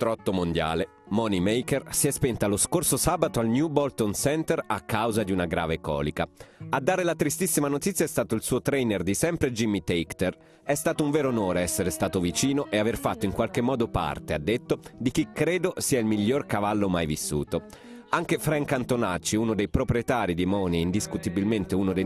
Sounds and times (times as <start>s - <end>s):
Music: 0.0s - 22.0s
Speech: 0.0s - 22.0s.